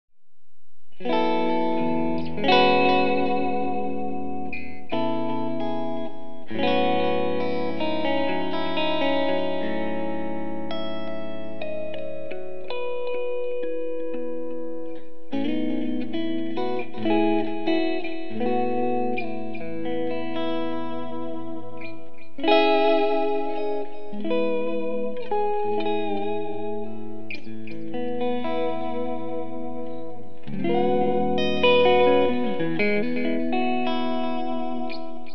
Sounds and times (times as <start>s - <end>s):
Effects unit: 0.2s - 35.3s
Electric guitar: 0.9s - 35.3s.